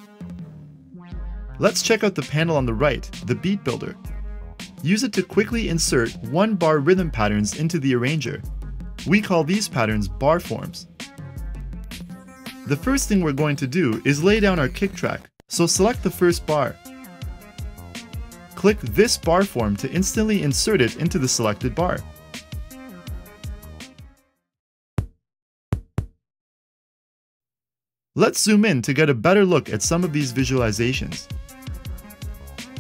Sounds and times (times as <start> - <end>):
Music: 0.0 - 24.5, 28.6 - 32.8
Speech: 1.6 - 4.0, 4.8 - 10.9, 12.7 - 16.8, 18.6 - 22.1, 28.2 - 31.3.